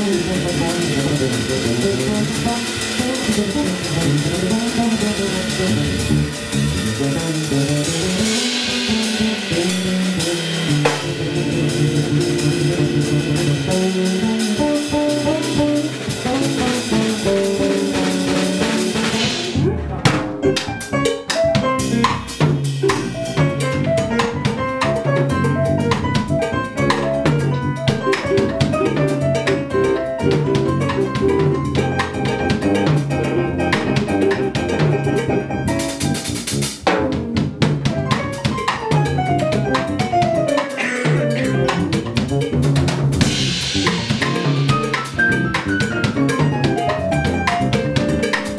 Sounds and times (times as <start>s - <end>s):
Bass drum: 0.0s - 48.5s
Drum kit: 0.0s - 48.5s
Rimshot: 0.2s - 24.6s, 33.7s - 35.0s, 36.0s - 48.5s.